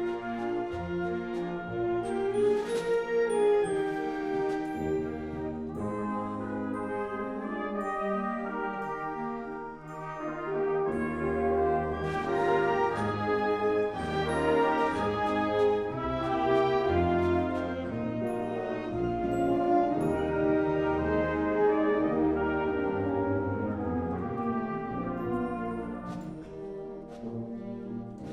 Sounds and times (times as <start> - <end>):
Music: 0.0 - 28.3.